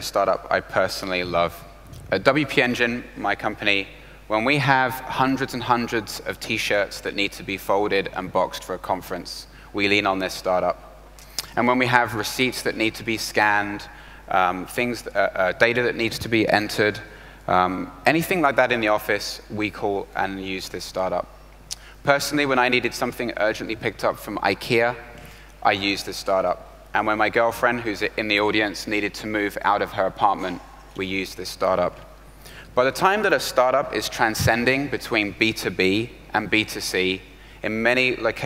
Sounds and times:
Speech: 0:00.0 - 0:10.8, 0:11.4 - 0:21.3, 0:22.0 - 0:32.0, 0:32.8 - 0:38.4.

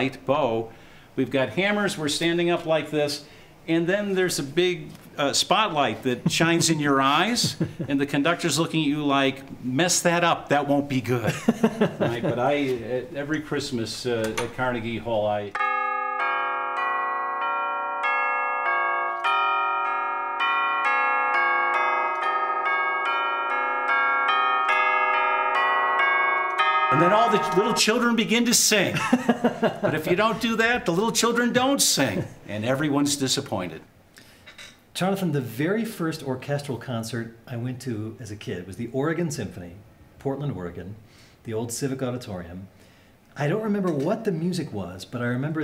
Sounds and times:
Speech: 0:00.0 - 0:11.4, 0:12.0 - 0:15.6, 0:26.9 - 0:29.0, 0:29.9 - 0:33.9, 0:35.0 - 0:42.7, 0:43.4 - 0:45.6
Percussion: 0:06.2 - 0:08.9, 0:14.2 - 0:33.4.

